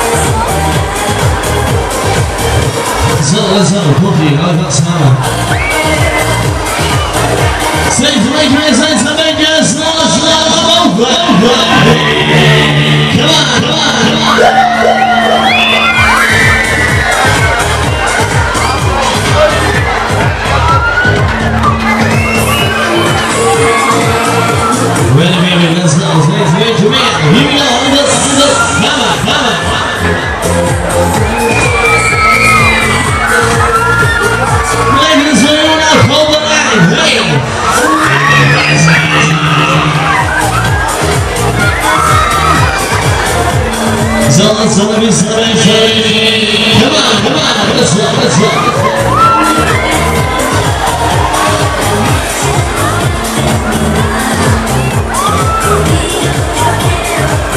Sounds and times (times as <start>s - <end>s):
Music: 0.0s - 57.5s.